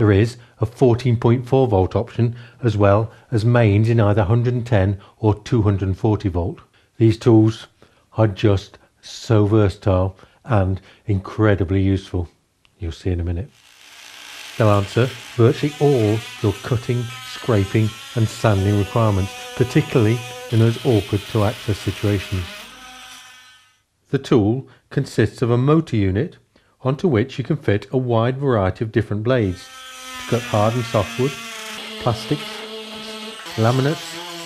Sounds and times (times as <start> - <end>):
Speech: 0.0 - 13.5, 14.6 - 22.6, 24.1 - 29.7, 30.3 - 31.4, 32.0 - 34.2.